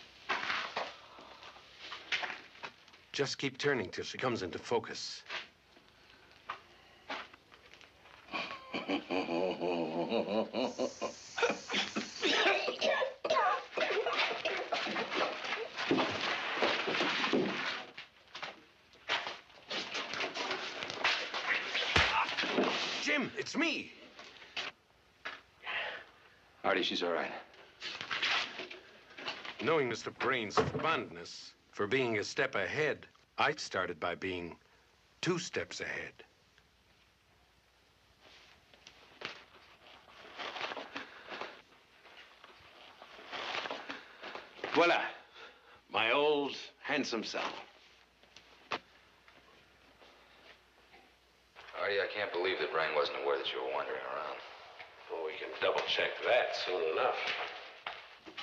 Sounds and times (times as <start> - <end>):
Male speech, man speaking: 3.1 - 5.3, 23.0 - 24.0, 26.6 - 27.5, 29.6 - 34.6, 35.2 - 36.3, 44.7 - 45.2, 45.9 - 47.7, 51.7 - 57.5.